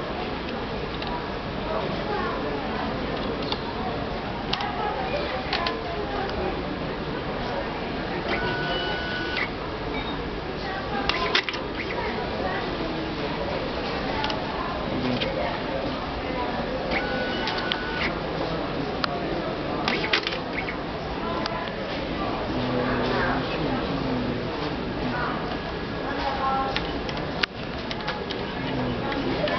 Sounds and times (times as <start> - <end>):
Speech: 0.0 - 29.5
Printer: 8.2 - 9.6, 16.9 - 18.2.